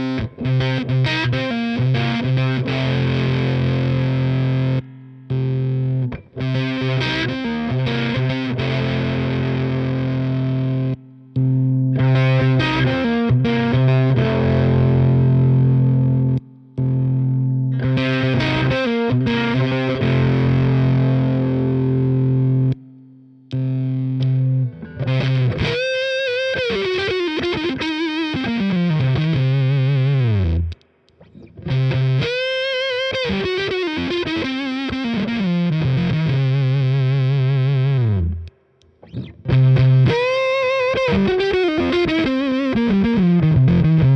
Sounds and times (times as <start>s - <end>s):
Distortion: 0.0s - 44.1s
Effects unit: 0.0s - 44.1s
Guitar: 0.0s - 44.1s
Inside, small room: 0.0s - 44.1s.